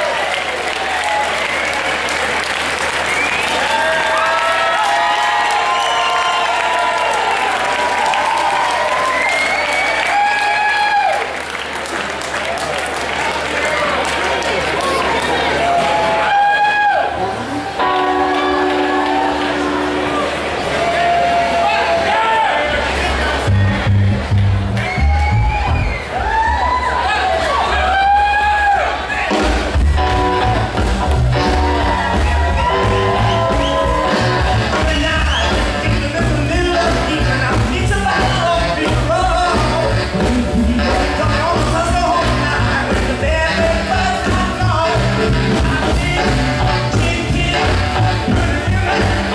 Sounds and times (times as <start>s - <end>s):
Music: 17.2s - 21.6s, 23.0s - 26.1s, 28.0s - 49.3s.